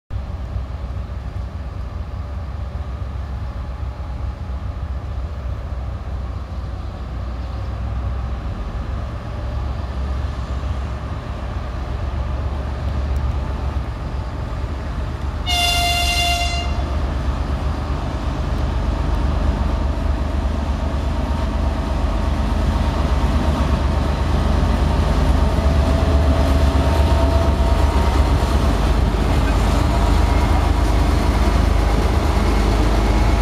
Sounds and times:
Railroad car, train wagon: 0.1s - 33.4s
Train: 0.1s - 33.4s.

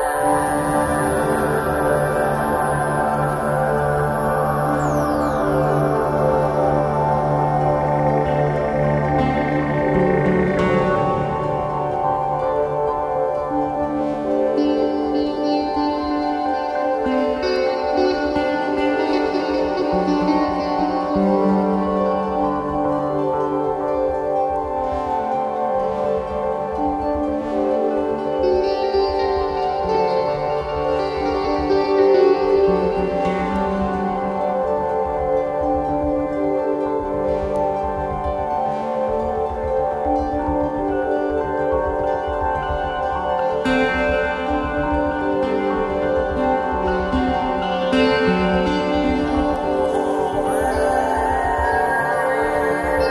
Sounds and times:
Ambient music: 0.0s - 53.1s.

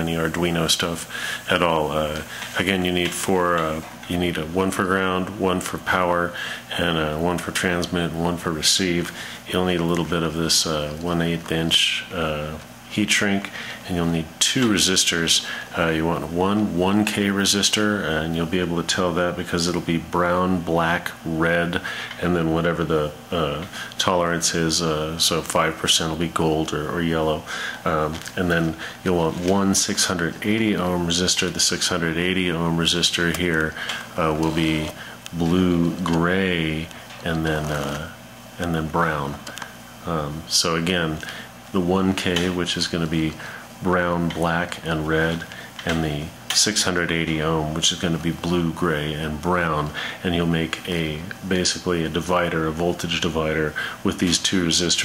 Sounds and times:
Speech: 0.0s - 55.0s.

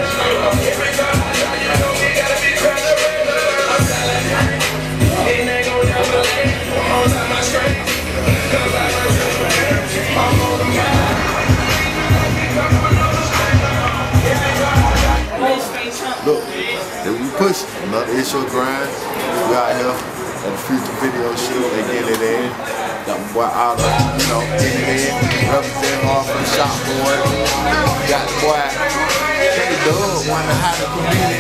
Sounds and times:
Music: 0.0s - 15.3s, 23.0s - 31.4s
Speech: 15.3s - 31.4s.

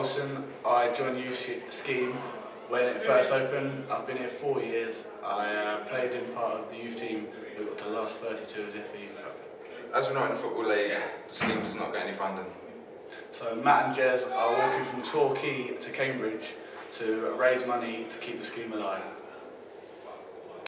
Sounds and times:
Speech: 0.0s - 12.6s, 13.3s - 20.6s.

